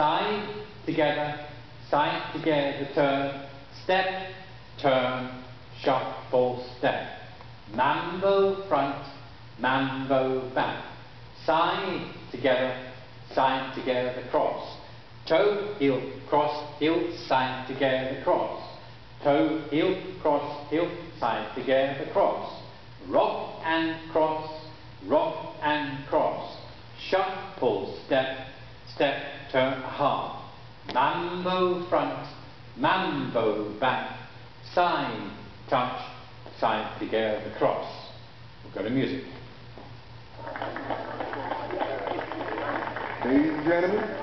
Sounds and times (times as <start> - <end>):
Speech: 0.0 - 39.5, 41.7 - 44.2.